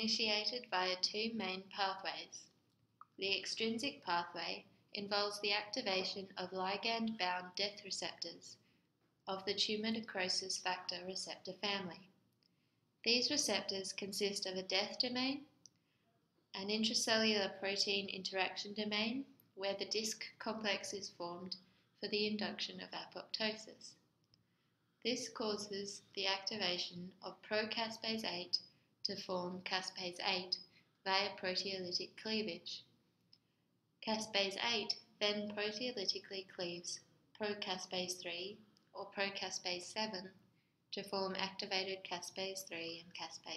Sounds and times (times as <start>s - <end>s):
Speech: 0.0s - 2.5s, 3.2s - 8.6s, 9.3s - 12.1s, 13.1s - 15.5s, 16.6s - 24.0s, 25.1s - 32.9s, 34.0s - 43.5s.